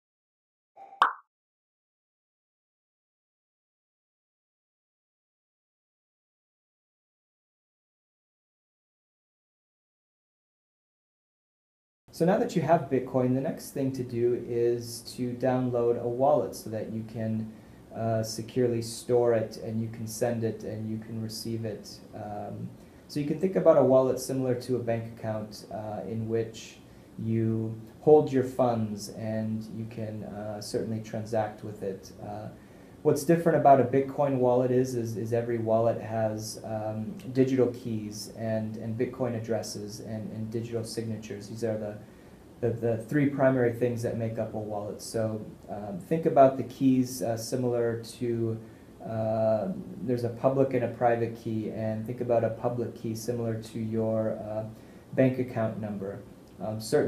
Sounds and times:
Plop: 0.8 - 1.3.

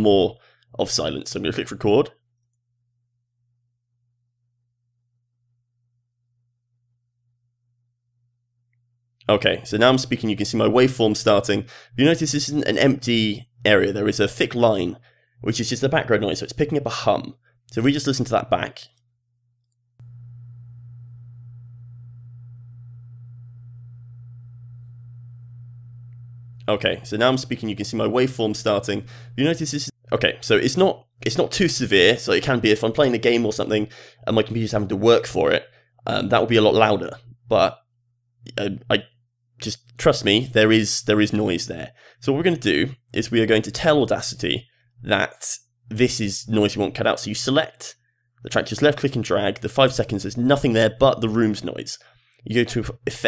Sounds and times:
Speech: 0.0 - 2.2, 9.2 - 19.0, 26.7 - 37.8, 38.5 - 53.2.

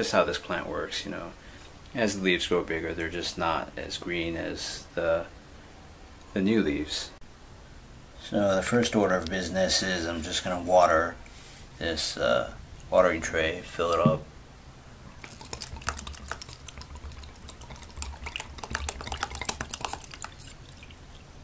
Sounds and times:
Speech: 0.0 - 5.3, 6.3 - 7.2, 8.2 - 11.2, 11.8 - 14.3
Inside, small room: 0.0 - 21.4.

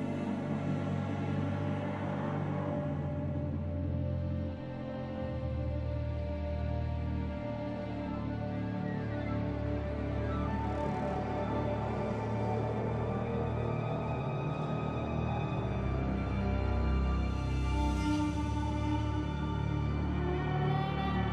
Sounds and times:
Music: 0.0 - 21.3.

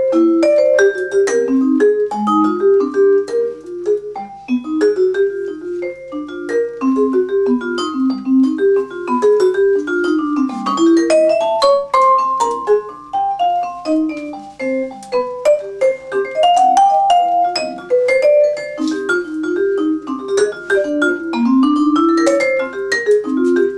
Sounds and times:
Percussion: 0.0 - 23.7.

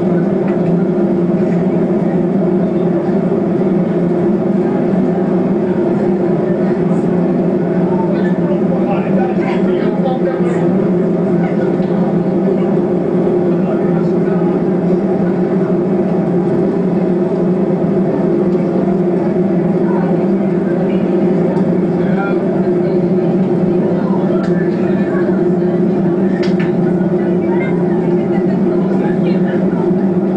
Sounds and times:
Speech: 0.0 - 30.3.

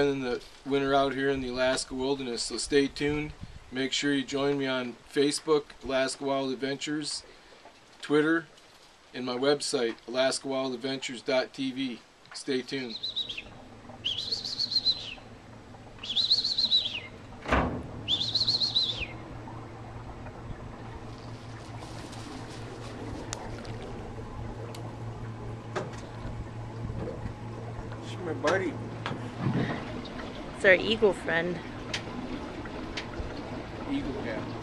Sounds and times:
Speech: 0.0 - 7.2, 9.2 - 13.0, 28.0 - 28.8, 33.9 - 34.5
Chirp, tweet: 12.9 - 15.3, 16.0 - 17.2, 18.1 - 19.2.

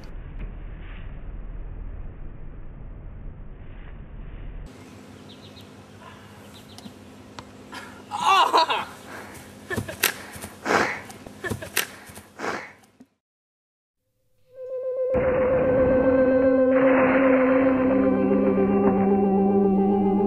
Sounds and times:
Outside, rural or natural: 0.0 - 13.2, 14.2 - 20.2
Snort: 12.4 - 12.8.

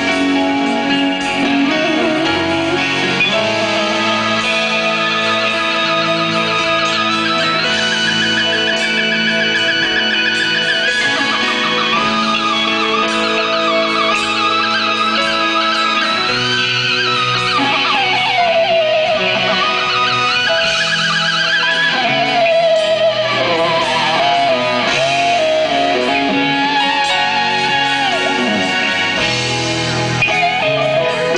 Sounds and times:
Rock and roll: 0.0 - 31.3.

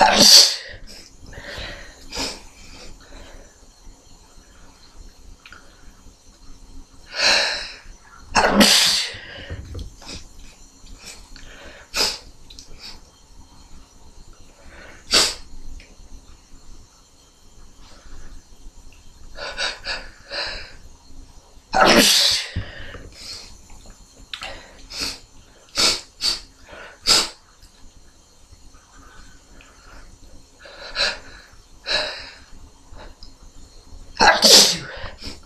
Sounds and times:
Sneeze: 0.0 - 0.8, 8.4 - 9.2, 15.1 - 15.4, 21.8 - 22.6, 34.2 - 35.4.

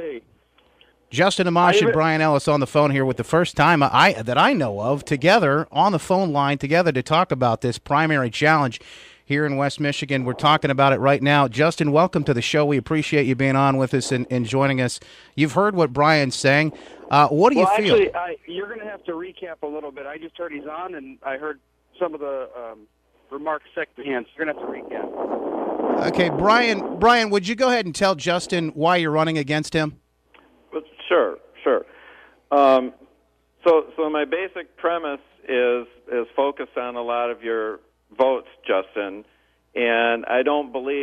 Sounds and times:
Speech: 0.0 - 0.2, 1.1 - 25.1, 26.0 - 30.0, 30.7 - 31.9, 32.5 - 41.0.

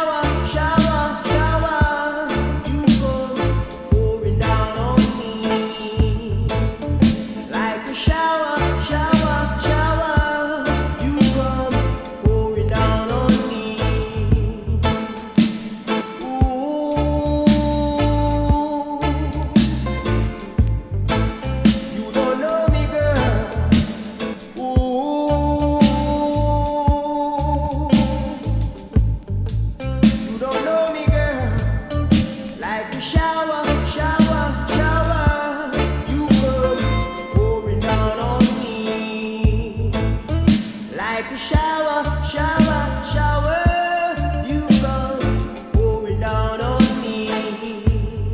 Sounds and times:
Music: 0.0 - 48.3.

